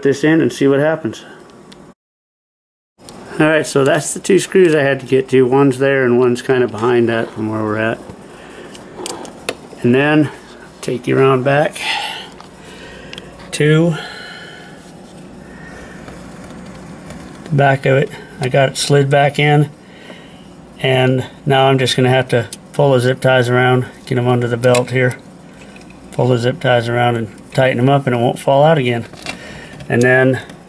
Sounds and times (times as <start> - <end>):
Speech: 0.0 - 1.4, 3.3 - 8.0, 9.8 - 12.0, 13.5 - 14.1, 17.5 - 19.8, 20.8 - 25.2, 26.2 - 29.1, 29.9 - 30.5.